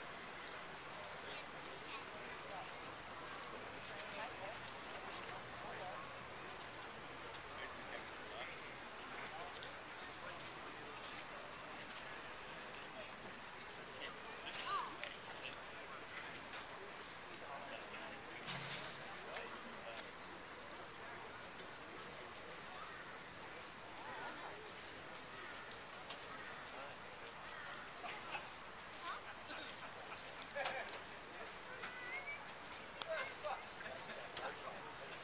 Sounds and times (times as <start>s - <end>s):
Vehicle: 0.0s - 35.2s
Speech: 0.3s - 35.2s.